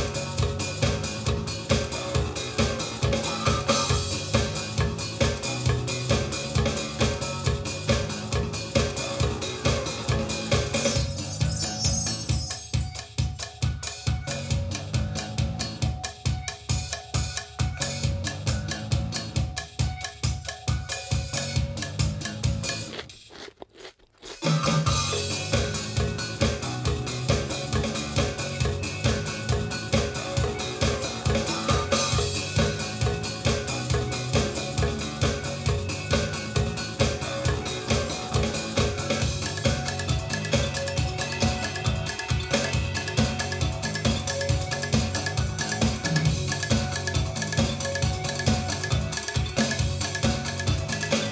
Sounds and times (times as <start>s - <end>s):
Rock and roll: 0.0s - 23.0s, 24.3s - 51.3s.